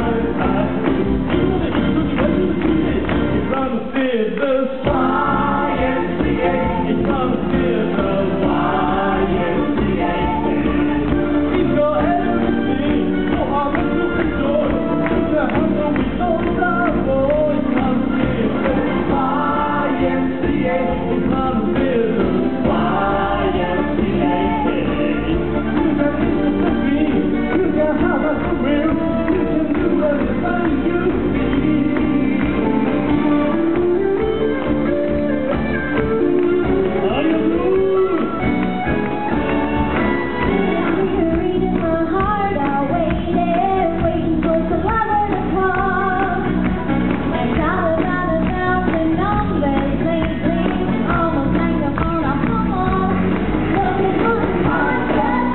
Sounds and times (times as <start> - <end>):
Rock and roll: 0.0 - 55.5.